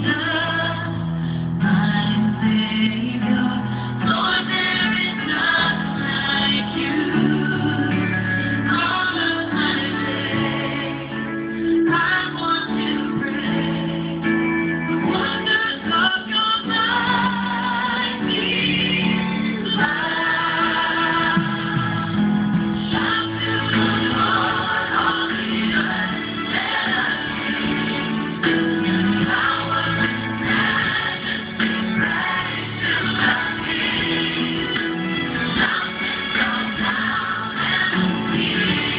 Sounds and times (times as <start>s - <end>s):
Music: 0.0s - 38.9s.